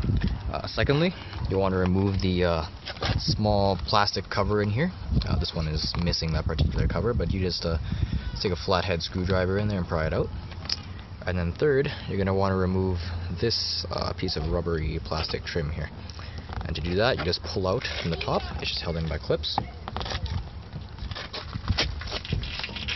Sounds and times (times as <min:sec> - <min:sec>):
Speech: 0:00.5 - 0:10.3, 0:11.2 - 0:15.9, 0:16.6 - 0:20.4.